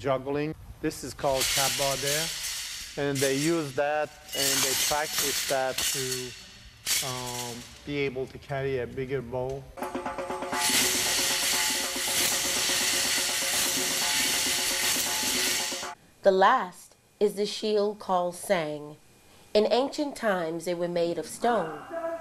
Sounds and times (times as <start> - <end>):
Speech: 3.0 - 6.3, 7.0 - 9.7, 19.6 - 22.0
Music: 9.8 - 16.0.